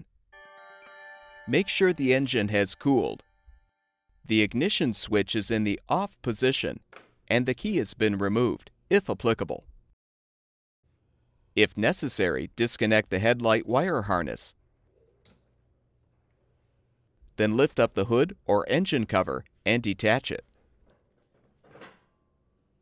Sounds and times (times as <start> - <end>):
Speech: 1.5 - 3.2, 4.3 - 9.7, 11.6 - 14.6, 17.4 - 20.5.